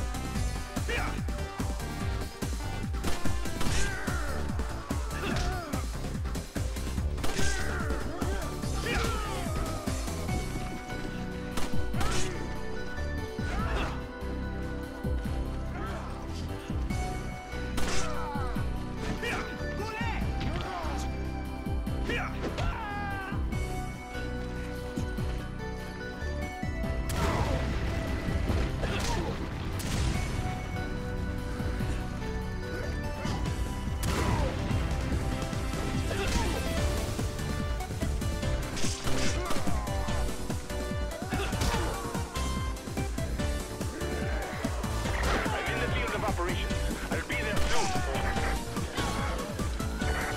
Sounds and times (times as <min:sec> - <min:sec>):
Music: 0:00.0 - 0:50.3.